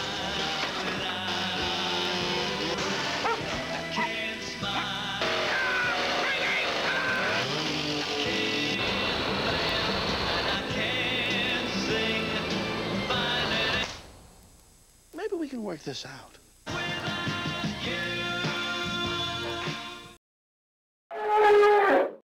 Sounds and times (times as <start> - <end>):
Music: 0.0 - 14.1, 16.7 - 20.2
Speech: 15.2 - 16.4.